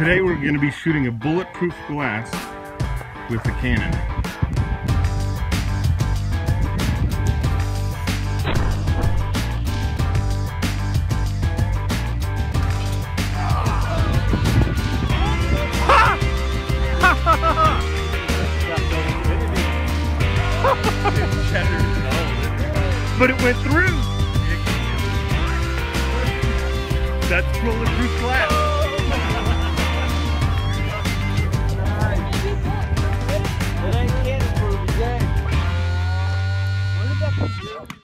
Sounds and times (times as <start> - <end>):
Music: 0.0 - 38.0.